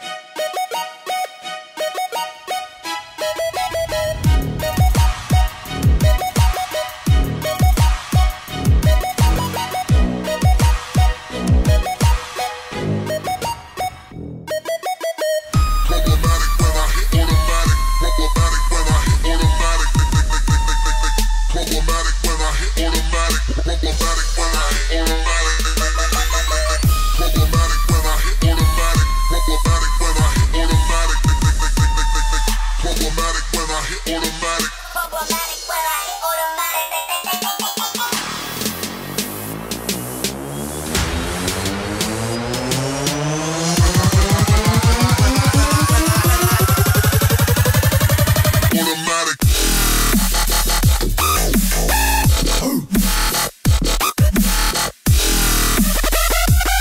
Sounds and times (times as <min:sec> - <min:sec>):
Dubstep: 0:01.9 - 0:56.8.